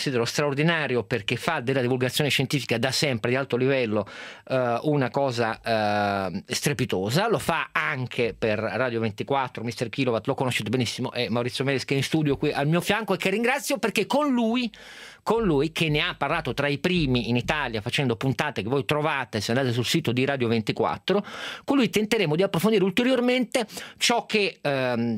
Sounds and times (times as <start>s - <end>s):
Speech: 0.0s - 25.1s.